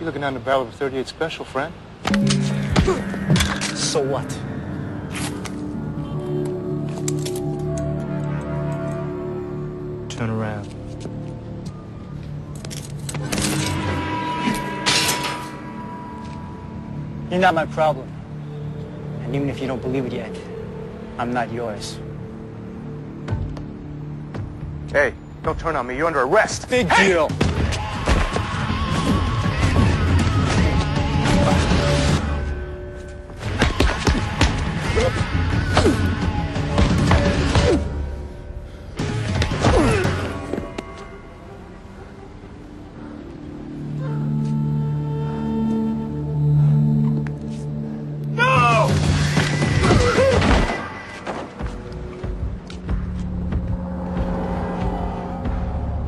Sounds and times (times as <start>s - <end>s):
Music: 2.0s - 56.0s.